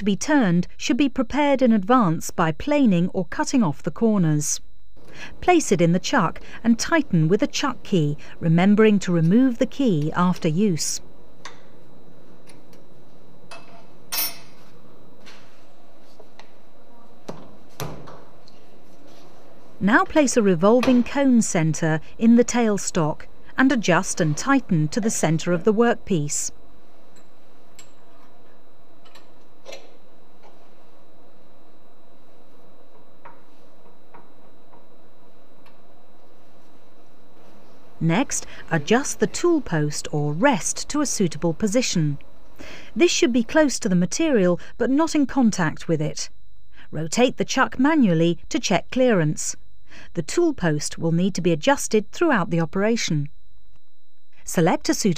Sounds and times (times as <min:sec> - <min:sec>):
Speech: 0:00.0 - 0:04.6, 0:05.4 - 0:11.0, 0:19.8 - 0:26.6, 0:38.0 - 0:42.2, 0:43.0 - 0:46.3, 0:46.9 - 0:49.6, 0:50.2 - 0:53.3, 0:54.5 - 0:55.1.